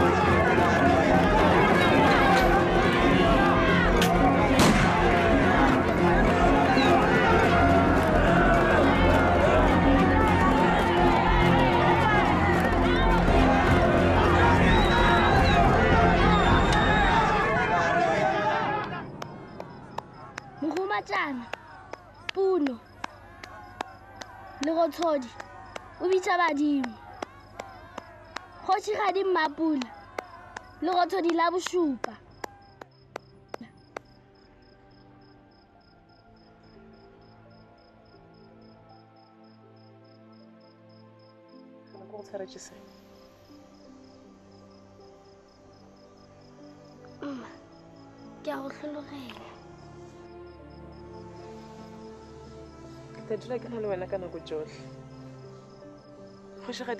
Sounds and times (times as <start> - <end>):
Music: 0.0 - 56.9.